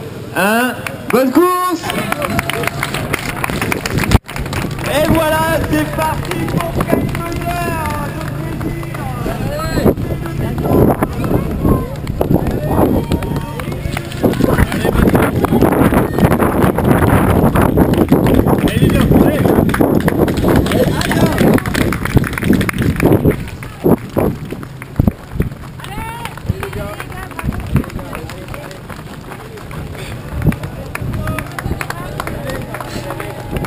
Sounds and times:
Outside, rural or natural: 0.0s - 33.6s
Run: 1.8s - 33.6s.

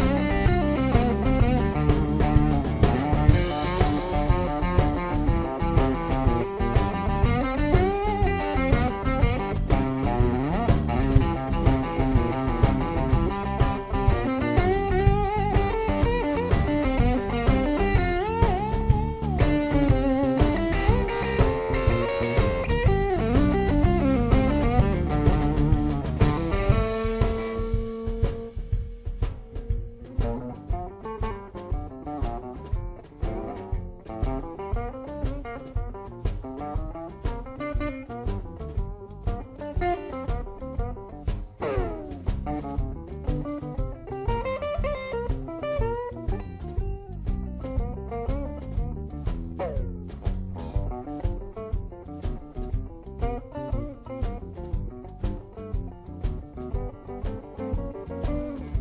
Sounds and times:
Bass guitar: 0.0s - 58.8s.

